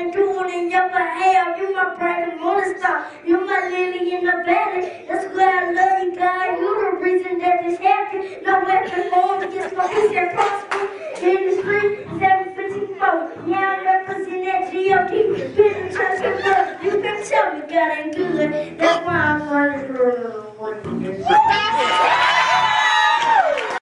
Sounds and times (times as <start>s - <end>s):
Child singing: 0.0s - 21.3s.